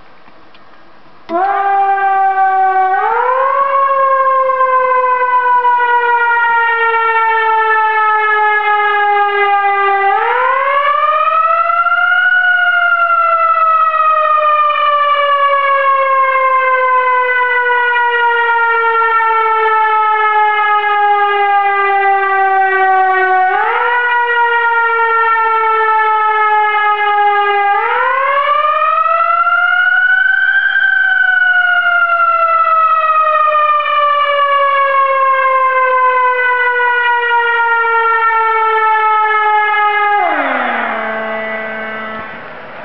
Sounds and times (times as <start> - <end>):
Police car (siren): 1.3 - 42.8.